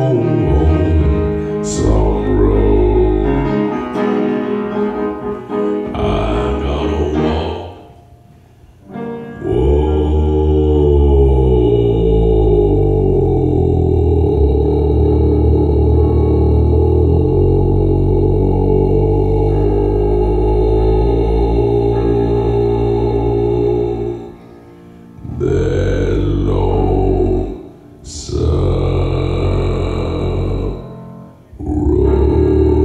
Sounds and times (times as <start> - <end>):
Piano: 0.0 - 32.8
Singing: 5.8 - 8.0, 9.4 - 24.5, 25.2 - 32.8.